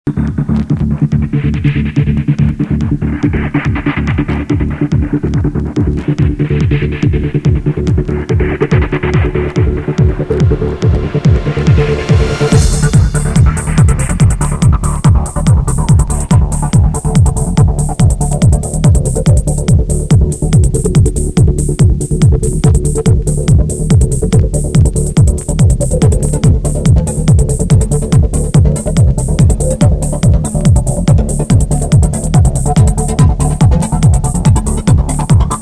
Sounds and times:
Techno: 0.1s - 35.6s.

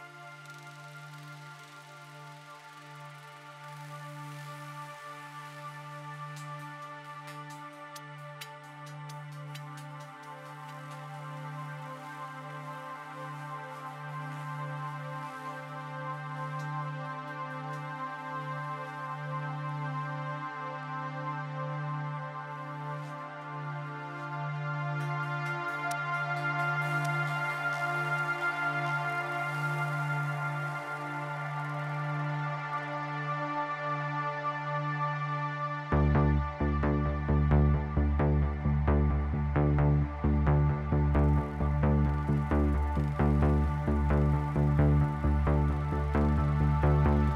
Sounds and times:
Music: 0.0s - 47.3s.

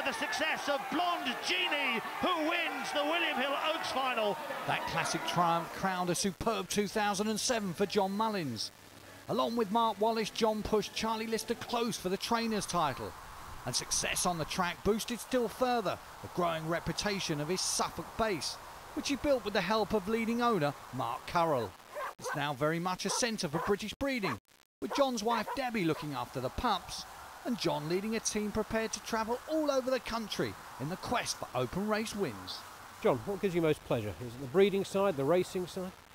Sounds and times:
Speech: 0.0s - 8.7s, 9.3s - 13.1s, 13.7s - 36.0s
Dog: 21.9s - 22.4s, 23.1s - 25.7s.

